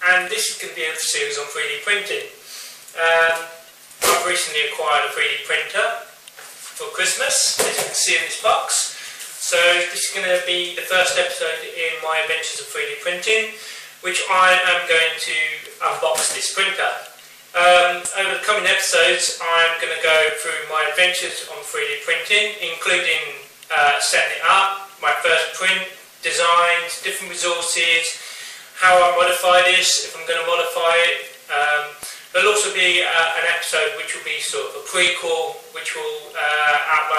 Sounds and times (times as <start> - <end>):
Speech: 0.0 - 2.4, 3.0 - 6.2, 6.8 - 28.2, 28.8 - 37.1.